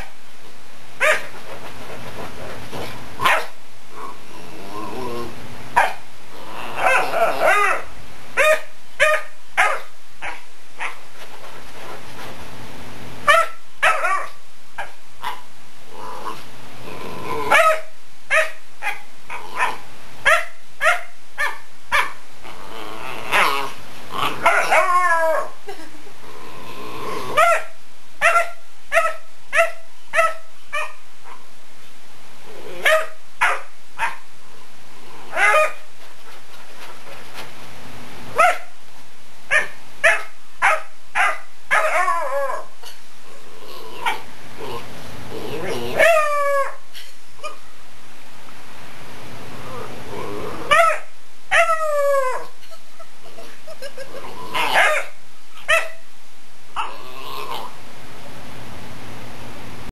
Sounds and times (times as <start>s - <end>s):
Bark: 1.0s - 1.3s, 3.2s - 3.6s, 5.8s - 6.0s, 6.8s - 11.0s, 13.3s - 15.4s, 17.5s - 22.2s, 24.4s - 24.9s, 27.4s - 31.4s, 32.8s - 34.2s, 35.3s - 35.8s, 38.4s - 38.7s, 39.5s - 42.1s, 50.7s - 51.7s, 54.6s - 56.0s.